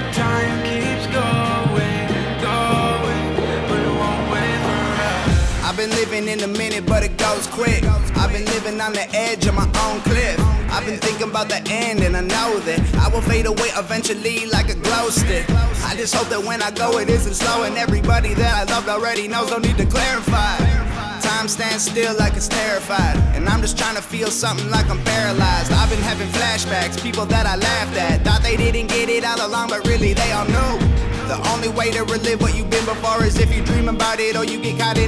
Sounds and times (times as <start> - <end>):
Music: 0.0 - 35.0.